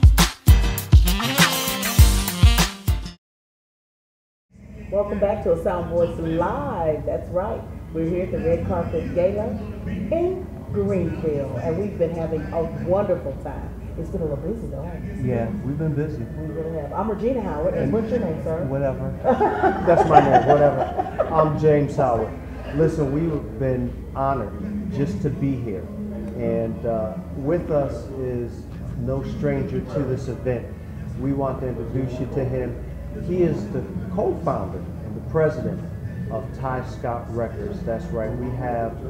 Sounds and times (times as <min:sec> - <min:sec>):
Speech: 0:15.0 - 0:16.4.